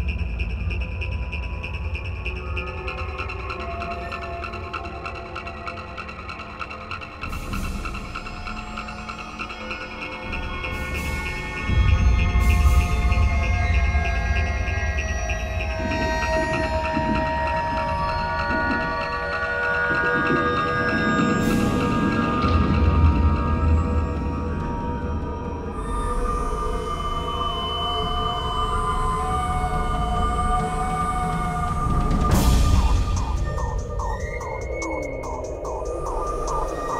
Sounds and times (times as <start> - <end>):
Music: 0.0 - 36.9.